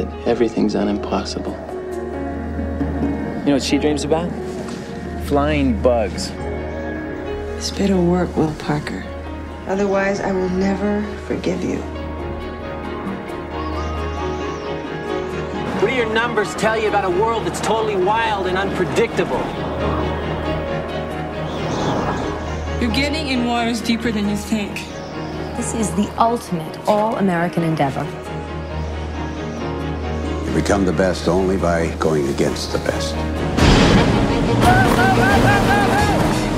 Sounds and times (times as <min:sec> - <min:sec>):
Music: 0:00.0 - 0:36.5.